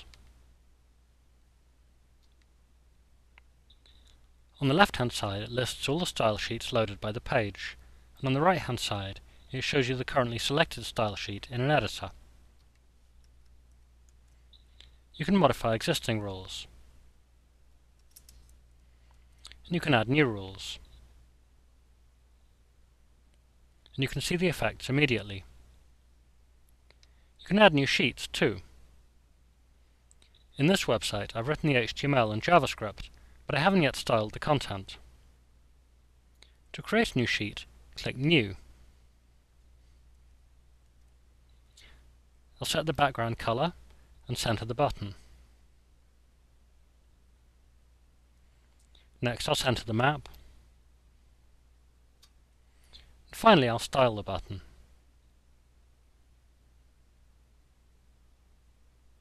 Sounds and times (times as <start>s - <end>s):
Speech: 4.6s - 12.2s, 15.2s - 16.8s, 19.5s - 20.9s, 23.9s - 25.5s, 27.4s - 28.7s, 30.6s - 35.0s, 36.7s - 38.6s, 42.6s - 45.2s, 49.2s - 50.3s, 53.3s - 54.7s.